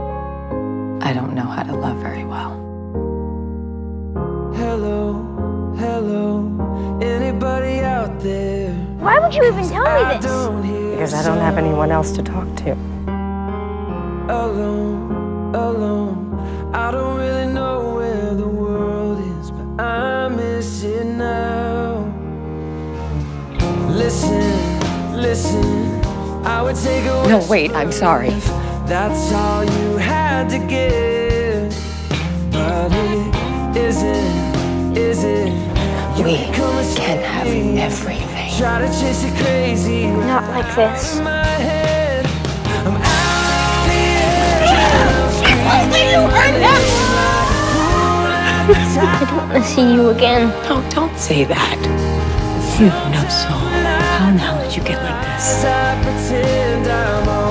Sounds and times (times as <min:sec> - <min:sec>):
Music: 0:00.0 - 0:57.5.